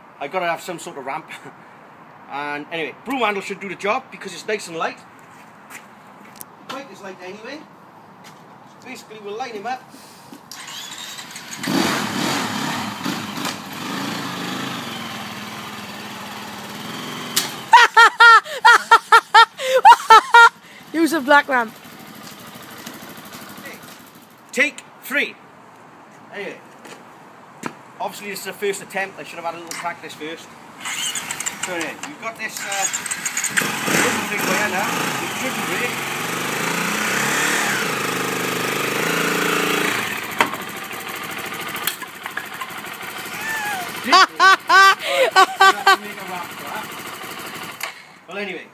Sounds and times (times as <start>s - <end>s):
Outside, urban or manmade: 0.0s - 48.7s
Speech: 0.2s - 1.5s, 2.3s - 5.0s, 6.7s - 7.7s, 8.8s - 9.8s, 20.9s - 21.7s, 24.5s - 25.4s, 26.3s - 26.6s, 28.0s - 30.5s, 31.7s - 32.9s, 34.0s - 36.0s, 48.3s - 48.7s
Motorcycle: 10.5s - 17.8s, 20.6s - 24.5s, 30.8s - 48.4s.